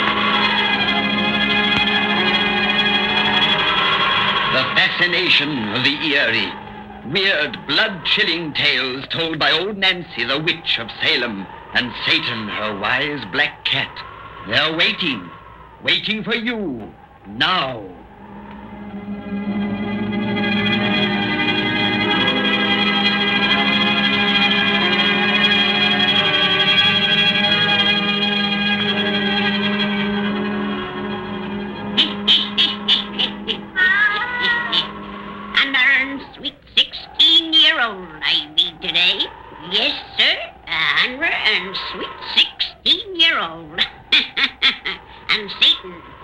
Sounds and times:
Music: 0.0 - 8.8, 18.1 - 35.7
Speech: 4.5 - 18.0, 35.6 - 46.1.

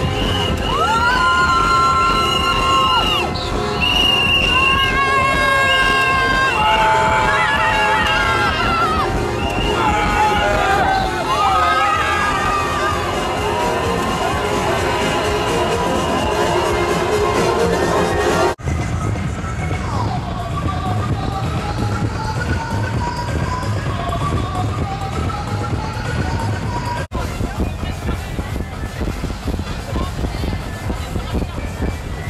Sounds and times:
Techno: 0.0 - 32.2.

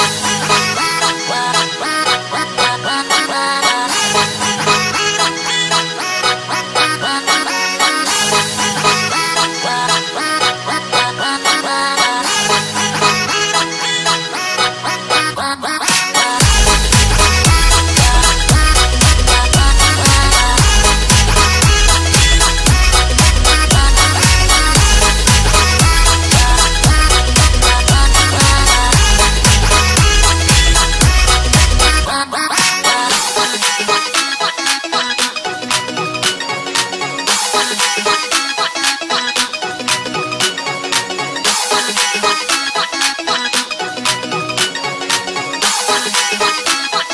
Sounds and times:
Music: 0.0 - 47.1.

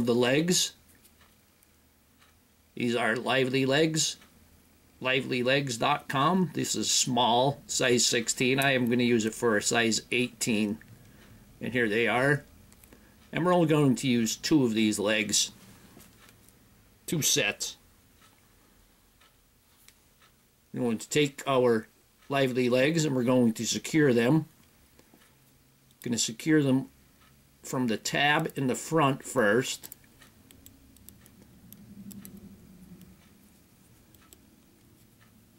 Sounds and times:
Speech: 0.0 - 0.8, 2.8 - 4.2, 5.0 - 10.8, 11.6 - 12.5, 13.3 - 15.6, 17.1 - 17.8, 20.7 - 24.5, 26.0 - 26.9, 27.6 - 29.9
Inside, small room: 0.0 - 35.5.

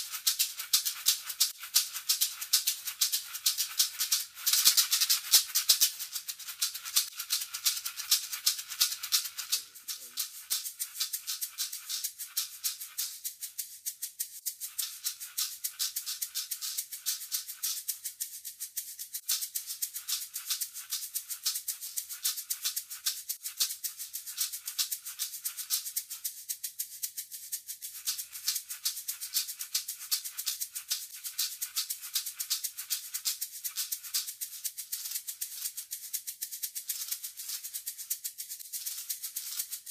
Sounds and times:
Percussion: 0.0 - 39.9.

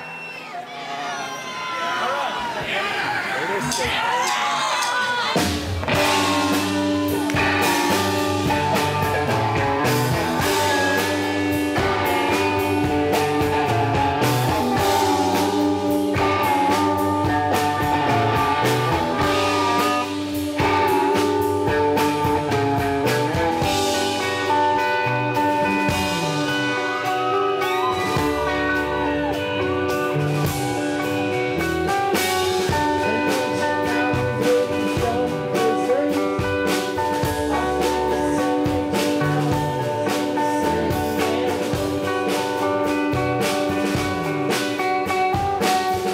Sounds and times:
Music: 4.8 - 46.1.

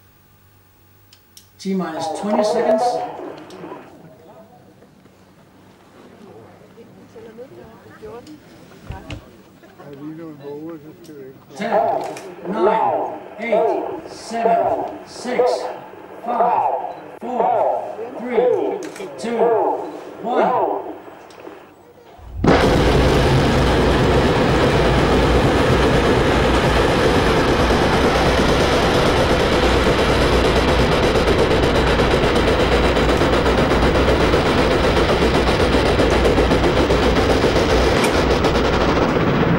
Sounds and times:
Speech: 1.6 - 4.8, 6.1 - 20.9.

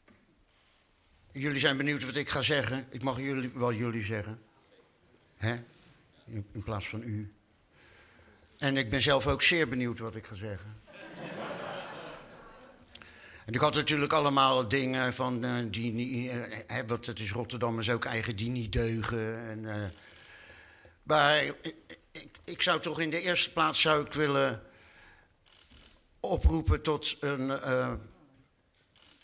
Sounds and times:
Narration, monologue: 0.0 - 29.2
Male speech, man speaking: 1.4 - 7.4, 8.6 - 10.8, 13.5 - 20.0, 21.1 - 24.6, 26.2 - 28.2.

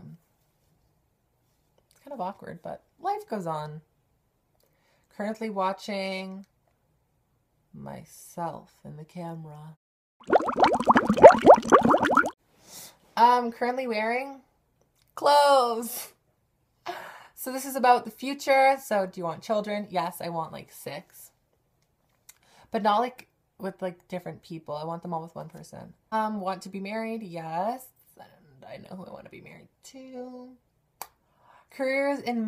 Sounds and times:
Speech: 2.0 - 3.9, 5.2 - 6.5, 7.8 - 9.8, 13.2 - 14.5, 15.2 - 16.2, 17.4 - 21.4, 22.8 - 30.6, 31.7 - 32.4.

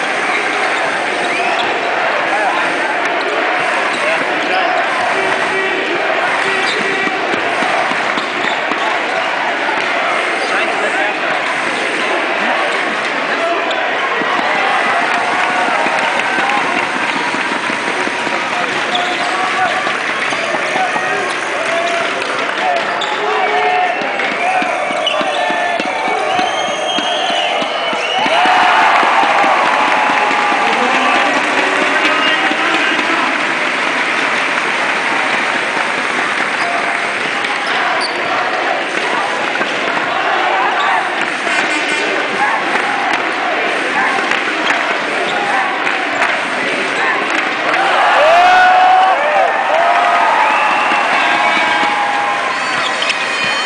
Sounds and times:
Speech: 0.0 - 7.7, 8.6 - 17.0, 18.2 - 33.8, 36.5 - 48.2.

